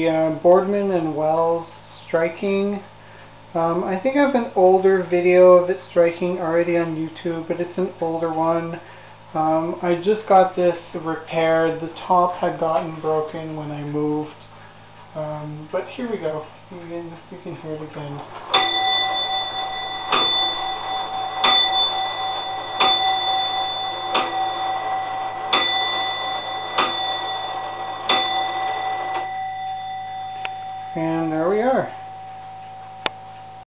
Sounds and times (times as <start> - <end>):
Speech: 0.0 - 2.9, 3.6 - 8.8, 9.4 - 14.4, 15.1 - 18.3, 31.0 - 32.0
Tick-tock: 20.1 - 24.4, 25.5 - 28.4.